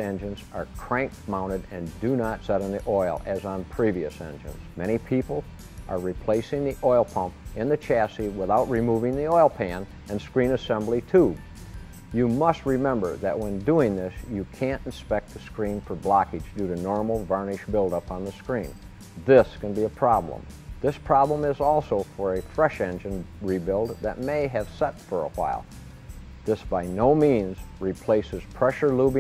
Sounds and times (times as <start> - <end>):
Speech: 0.0 - 11.4, 12.2 - 25.7, 26.5 - 29.2
Music: 0.0 - 29.2.